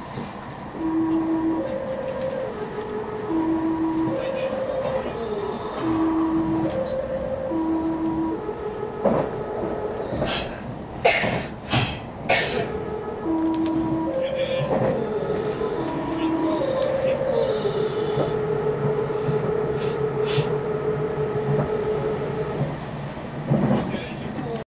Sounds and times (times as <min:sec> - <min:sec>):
Train: 0:00.0 - 0:24.6
Speech: 0:23.8 - 0:24.6.